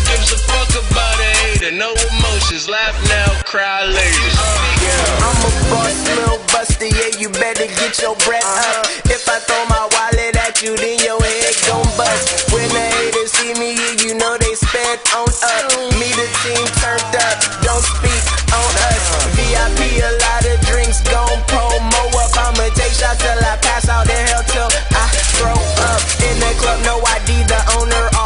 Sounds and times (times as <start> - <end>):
Blues: 0.0 - 28.2
Independent music: 0.0 - 28.2.